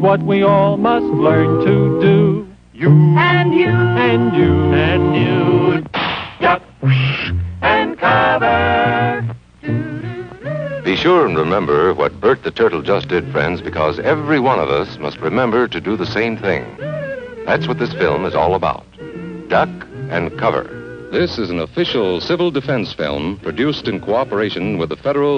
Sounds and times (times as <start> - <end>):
Music: 0.0 - 25.3
Speech: 10.9 - 16.8, 17.5 - 18.9, 19.5 - 25.3.